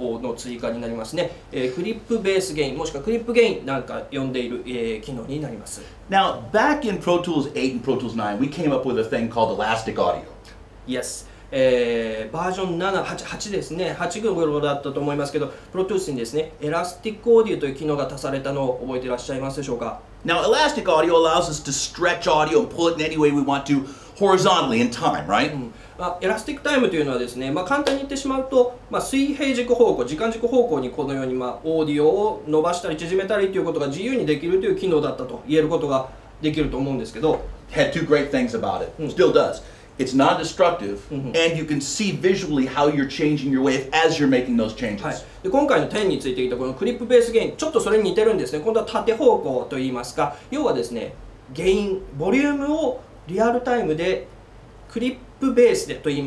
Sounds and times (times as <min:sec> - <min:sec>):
Speech: 0:00.0 - 0:54.3, 0:54.9 - 0:56.2.